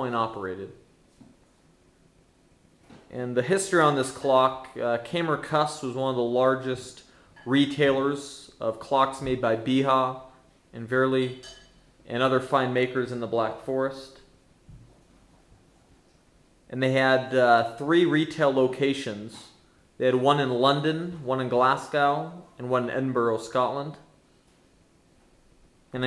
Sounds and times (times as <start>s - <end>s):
Speech: 0.0s - 0.8s, 3.1s - 11.4s, 12.1s - 14.3s, 16.7s - 24.1s.